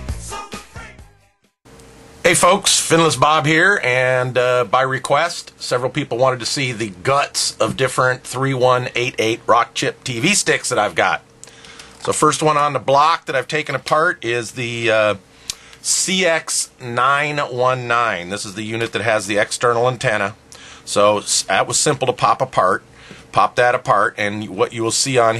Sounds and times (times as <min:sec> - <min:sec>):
Speech: 0:02.2 - 0:11.2, 0:12.0 - 0:15.2, 0:15.8 - 0:25.3.